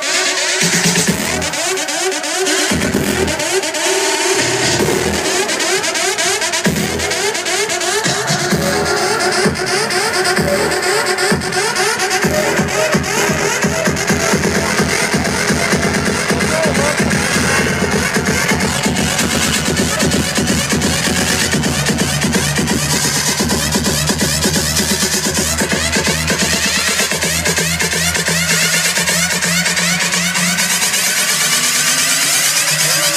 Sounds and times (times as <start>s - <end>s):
Music: 0.0s - 33.1s.